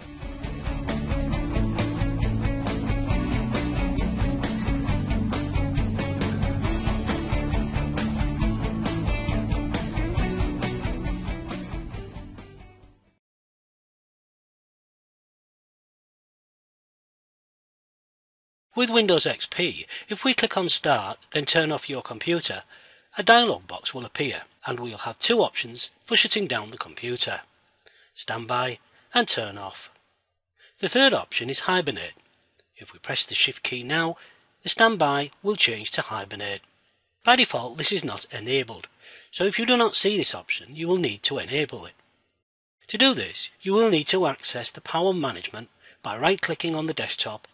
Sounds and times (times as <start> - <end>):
Speech: 18.8 - 27.5, 28.2 - 30.0, 30.8 - 32.2, 32.8 - 36.7, 37.3 - 42.0, 42.9 - 47.5.